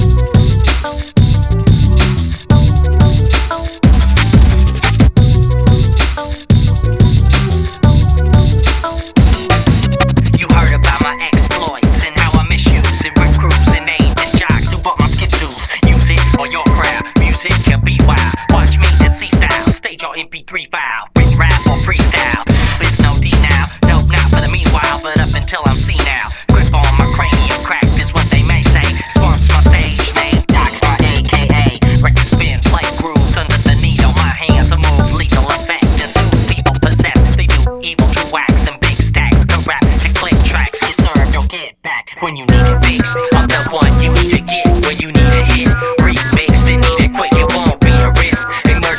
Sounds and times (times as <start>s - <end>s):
Music: 0.0s - 20.0s, 21.1s - 41.6s, 42.5s - 48.9s.